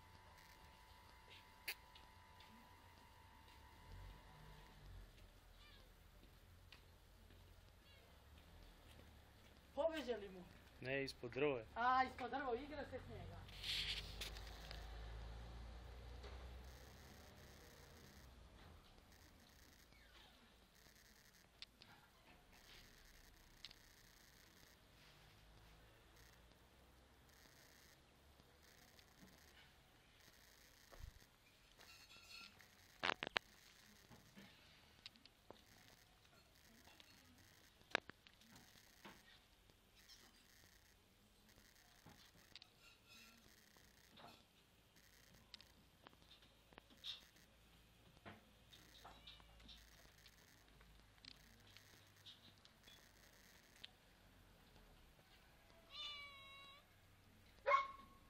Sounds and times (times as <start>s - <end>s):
Cat: 4.5s - 6.3s, 7.7s - 8.4s, 19.1s - 24.8s, 48.7s - 53.9s, 55.4s - 57.0s.